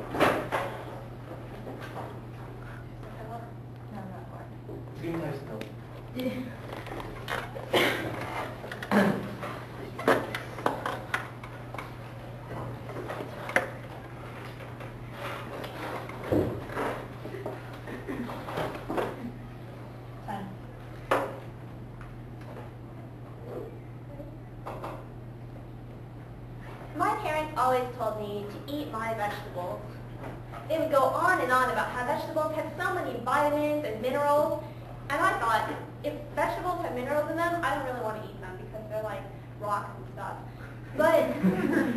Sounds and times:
Female speech, woman speaking: 0:03.0 - 0:04.6, 0:20.3 - 0:20.6, 0:27.0 - 0:30.0, 0:30.7 - 0:41.5
Narration, monologue: 0:26.1 - 0:41.3.

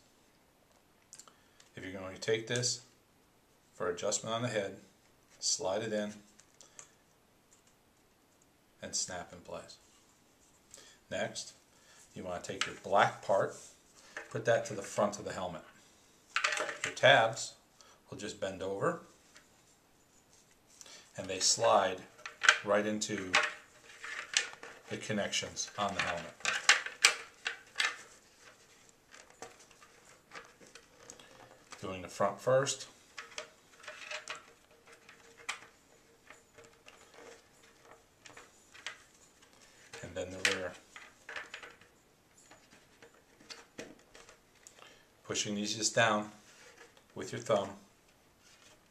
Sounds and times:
Inside, small room: 0:00.0 - 0:48.9
Speech: 0:01.8 - 0:02.9, 0:03.8 - 0:06.3, 0:08.8 - 0:09.8, 0:11.1 - 0:11.6, 0:12.2 - 0:13.6, 0:14.3 - 0:15.8, 0:16.9 - 0:19.1, 0:21.2 - 0:23.5, 0:24.9 - 0:26.4, 0:31.8 - 0:33.0, 0:40.0 - 0:40.8, 0:45.3 - 0:46.4, 0:47.2 - 0:47.9.

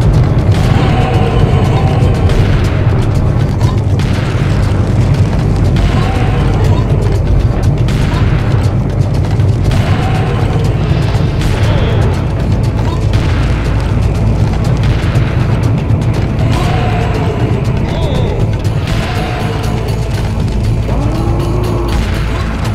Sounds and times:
Boom: 0:00.0 - 0:22.7
Music: 0:00.0 - 0:22.7.

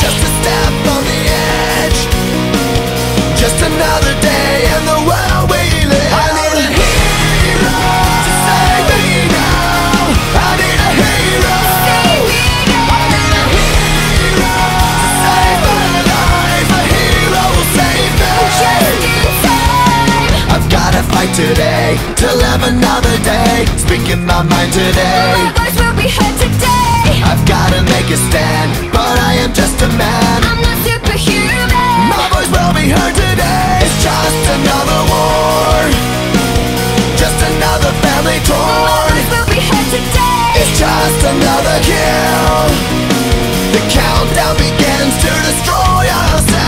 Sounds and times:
Grunge: 0:00.0 - 0:46.6.

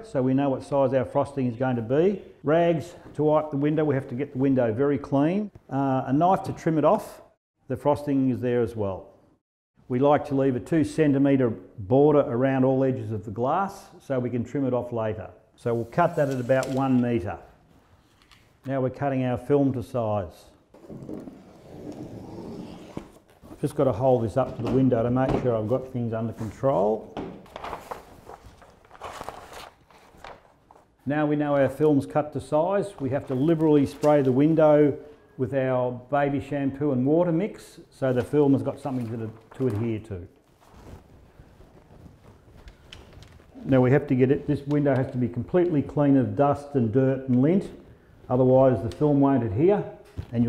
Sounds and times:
Speech: 0:00.0 - 0:09.1, 0:09.9 - 0:17.5, 0:18.6 - 0:20.6, 0:23.6 - 0:27.2, 0:31.0 - 0:40.4, 0:43.6 - 0:50.4.

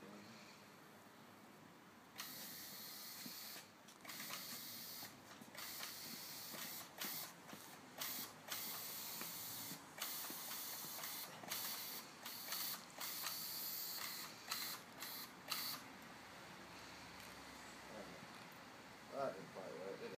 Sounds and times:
Spray: 0:02.2 - 0:15.8
Speech: 0:19.1 - 0:20.1.

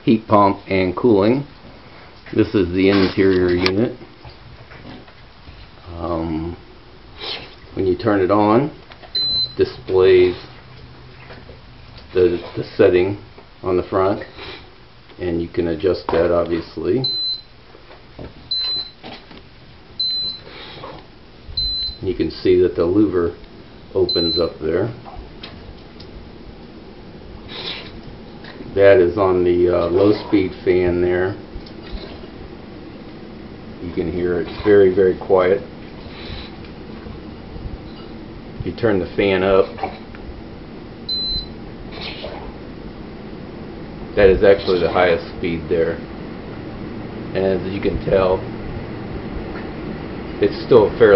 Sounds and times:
Speech: 0:00.0 - 0:01.5, 0:02.3 - 0:04.0, 0:05.8 - 0:06.6, 0:07.8 - 0:08.8, 0:09.6 - 0:10.5, 0:12.1 - 0:14.3, 0:15.2 - 0:17.1, 0:22.0 - 0:25.0, 0:28.8 - 0:31.4, 0:33.8 - 0:35.7, 0:38.6 - 0:39.8, 0:44.2 - 0:46.0, 0:47.3 - 0:48.5, 0:50.4 - 0:51.1
Air conditioning: 0:00.0 - 0:51.1.

